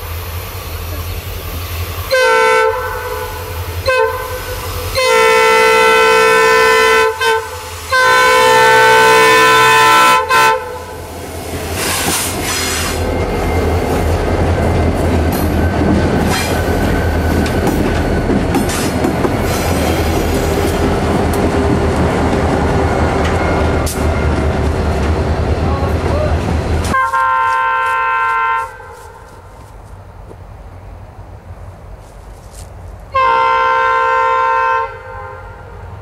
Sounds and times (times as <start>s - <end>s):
Railroad car, train wagon: 0.0s - 36.0s
Train horn: 2.1s - 11.0s, 26.9s - 29.3s, 33.1s - 36.0s.